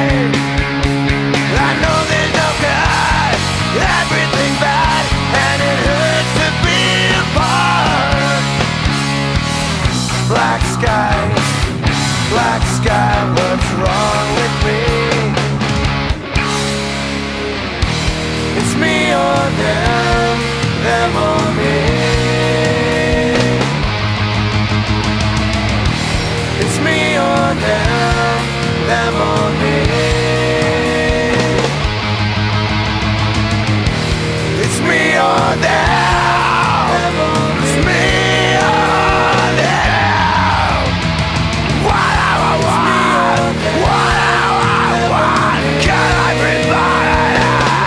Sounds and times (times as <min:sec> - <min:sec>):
Progressive rock: 0:00.0 - 0:47.8
Punk rock: 0:00.0 - 0:47.8.